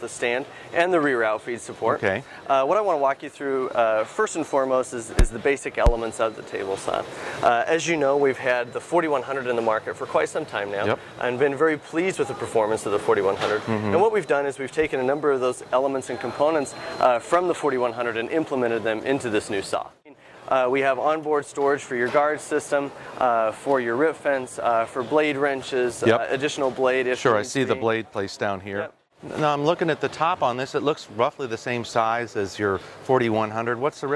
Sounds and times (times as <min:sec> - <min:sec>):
Speech: 0:00.0 - 0:34.1.